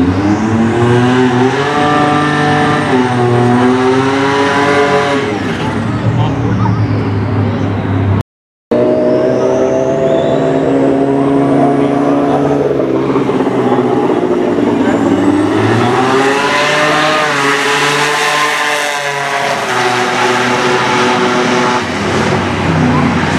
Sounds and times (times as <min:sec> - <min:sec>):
Outside, urban or manmade: 0:00.0 - 0:23.3
Race car, auto racing: 0:00.0 - 0:23.3.